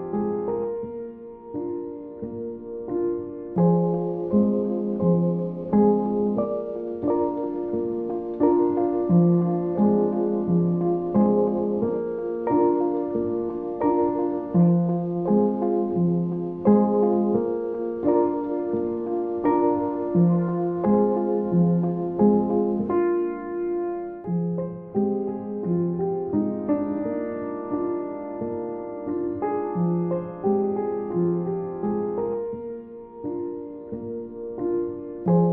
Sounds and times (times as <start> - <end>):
Music: 0.0 - 35.5.